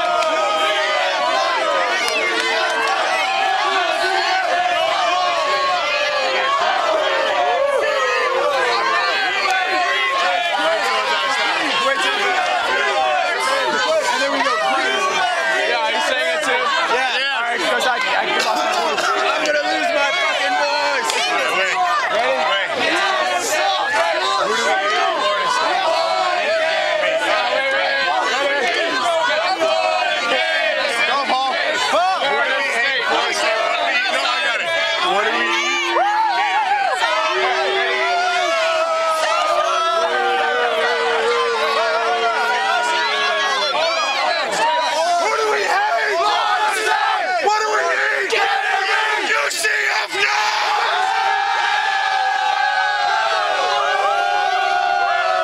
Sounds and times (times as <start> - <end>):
Speech: 0.0 - 55.4.